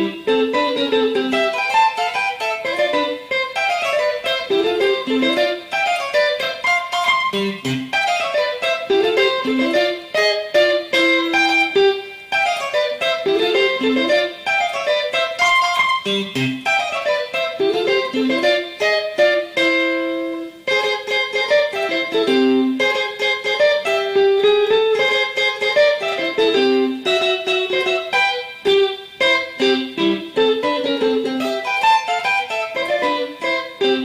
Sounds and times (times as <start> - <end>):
Electric guitar: 0.0 - 34.0.